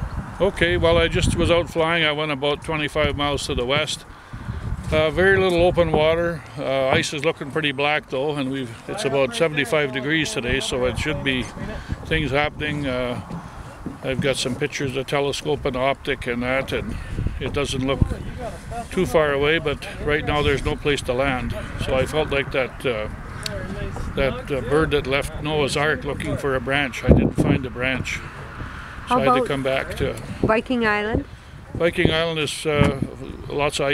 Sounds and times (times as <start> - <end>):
Speech: 0.4 - 4.0, 4.9 - 13.3, 14.0 - 28.2, 29.1 - 31.2, 31.8 - 33.9.